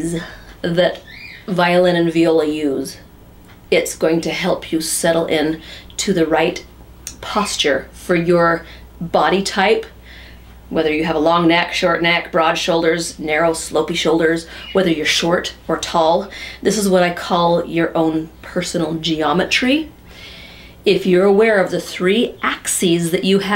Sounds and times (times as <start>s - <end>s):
Speech: 0.0s - 3.1s, 3.7s - 10.0s, 10.7s - 19.9s, 20.8s - 23.5s.